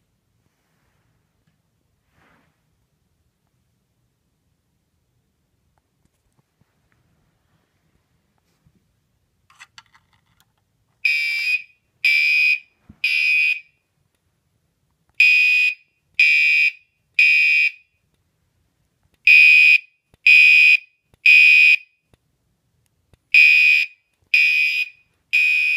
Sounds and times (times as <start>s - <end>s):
Smoke detector, smoke alarm: 11.0s - 13.8s, 15.2s - 18.0s, 19.3s - 22.0s, 23.4s - 25.7s.